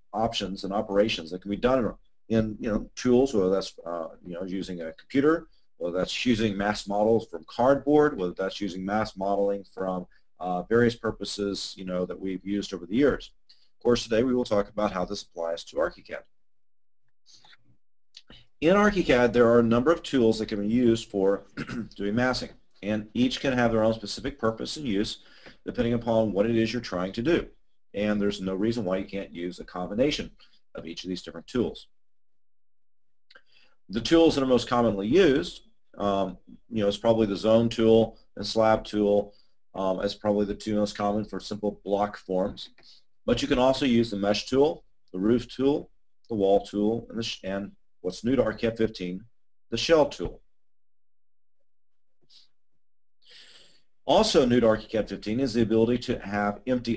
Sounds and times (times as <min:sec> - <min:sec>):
Speech: 0:00.2 - 0:16.2, 0:18.2 - 0:31.9, 0:33.9 - 0:50.4, 0:54.1 - 0:56.9.